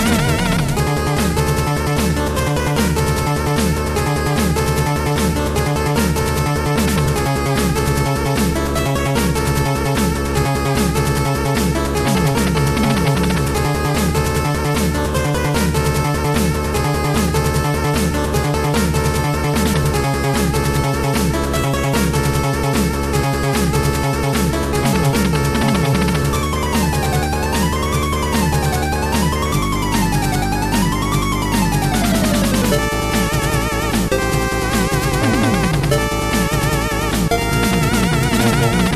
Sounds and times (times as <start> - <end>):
Soundtrack music: 0.0 - 38.9.